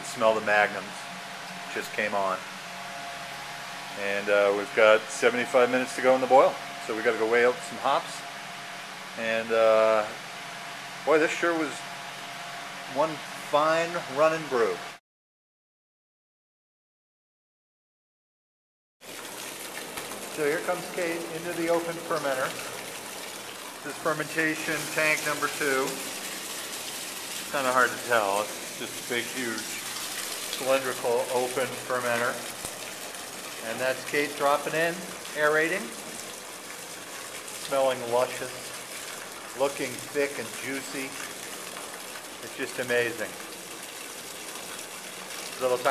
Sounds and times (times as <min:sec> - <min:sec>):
Speech: 0:00.0 - 0:01.0, 0:01.7 - 0:02.4, 0:04.0 - 0:08.2, 0:09.2 - 0:10.2, 0:11.1 - 0:11.8, 0:12.9 - 0:14.8, 0:20.4 - 0:22.7, 0:23.9 - 0:26.0, 0:27.5 - 0:29.8, 0:30.6 - 0:32.5, 0:33.6 - 0:36.0, 0:37.6 - 0:38.6, 0:39.6 - 0:41.3, 0:42.4 - 0:43.4, 0:45.6 - 0:45.9
Gush: 0:00.0 - 0:15.0, 0:19.0 - 0:45.9.